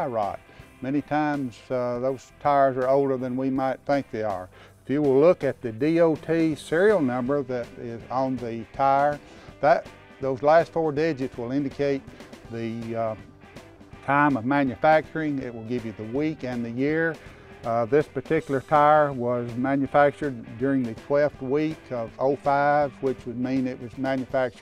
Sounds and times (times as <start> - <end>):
Speech: 0.0 - 13.2, 14.1 - 24.6
Music: 0.0 - 24.6.